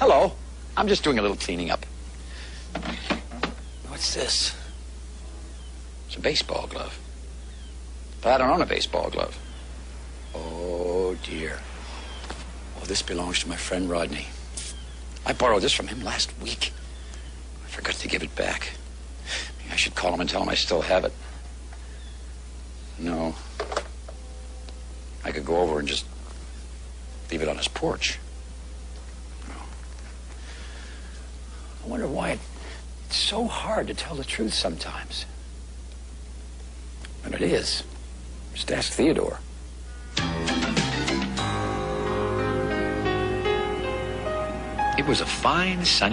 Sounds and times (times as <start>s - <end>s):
Speech: 0.0s - 1.9s, 3.8s - 4.7s, 6.1s - 7.0s, 8.2s - 9.4s, 10.3s - 11.7s, 12.8s - 14.4s, 15.2s - 16.8s, 17.6s - 18.8s, 19.6s - 21.2s, 23.0s - 23.4s, 25.2s - 26.1s, 27.3s - 28.2s, 31.8s - 32.5s, 33.1s - 35.4s, 37.2s - 39.5s, 45.0s - 46.1s.